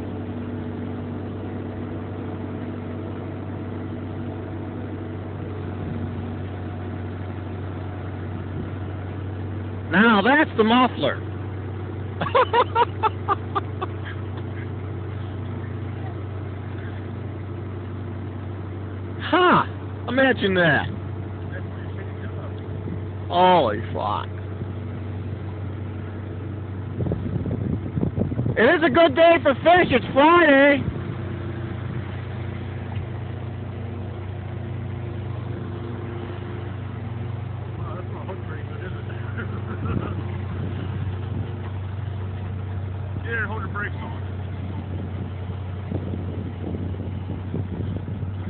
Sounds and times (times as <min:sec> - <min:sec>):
Vehicle: 0:00.0 - 0:48.4
Speech: 0:09.9 - 0:11.2, 0:23.3 - 0:24.3, 0:28.6 - 0:30.8, 0:37.8 - 0:39.4, 0:43.2 - 0:44.3.